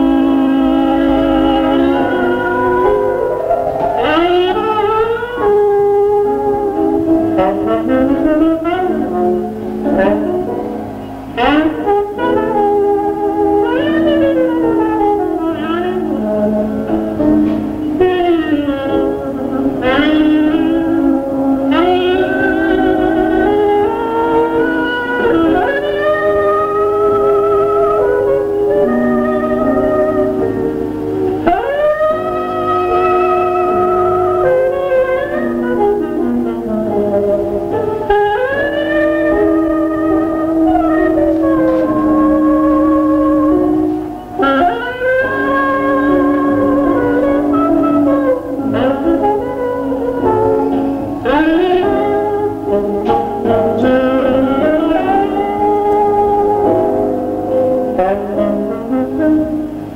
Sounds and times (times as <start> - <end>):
Jazz: 0.0 - 59.9.